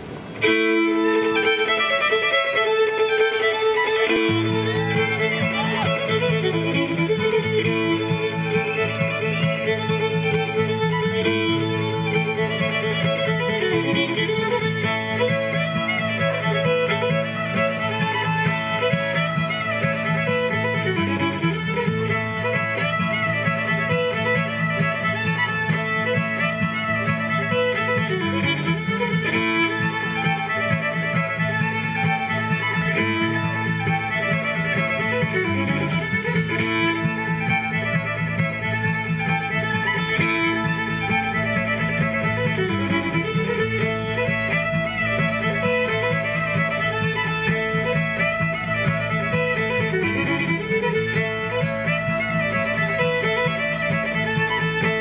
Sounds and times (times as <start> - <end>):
Violin, fiddle: 0.0 - 55.0.